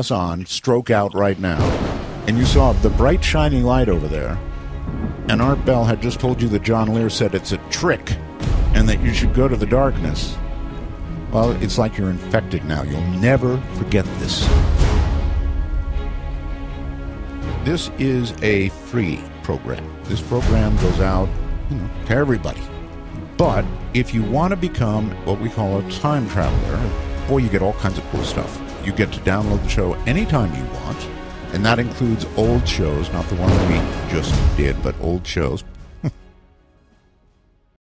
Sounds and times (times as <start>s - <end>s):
Speech: 0.0s - 4.4s, 5.3s - 10.4s, 11.3s - 14.5s, 17.6s - 35.7s
Music: 0.0s - 37.8s.